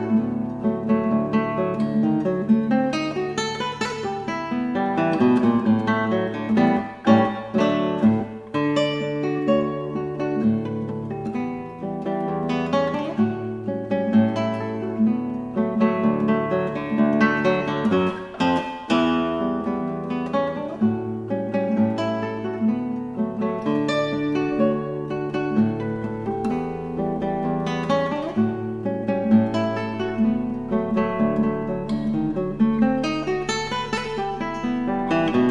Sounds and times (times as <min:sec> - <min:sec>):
Music: 0:00.0 - 0:35.5.